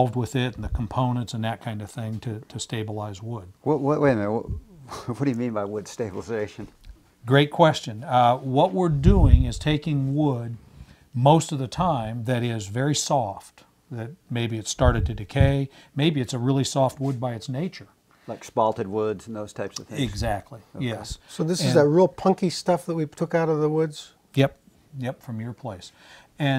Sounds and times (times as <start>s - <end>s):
Speech: 0.0s - 10.6s, 11.2s - 26.5s.